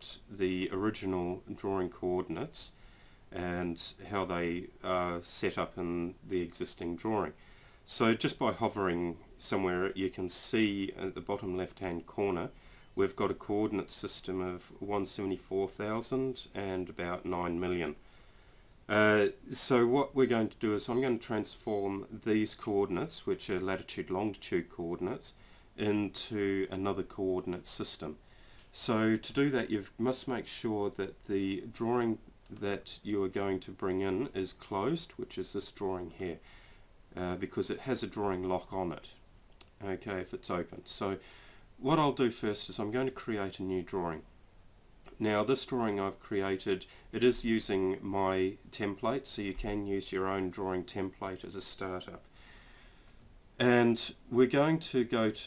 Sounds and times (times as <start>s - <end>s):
Speech: 0.0s - 18.0s, 18.9s - 36.4s, 37.1s - 41.2s, 41.8s - 44.3s, 45.1s - 52.3s, 53.6s - 55.4s.